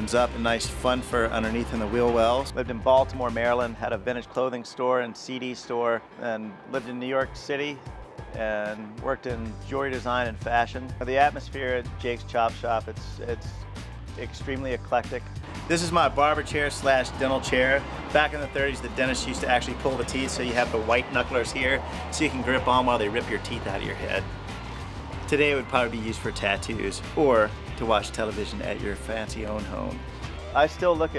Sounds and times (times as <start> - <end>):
Speech: 0.0 - 7.8, 8.4 - 13.6, 14.2 - 24.2, 25.3 - 30.0, 30.6 - 31.1
Music: 0.0 - 31.1.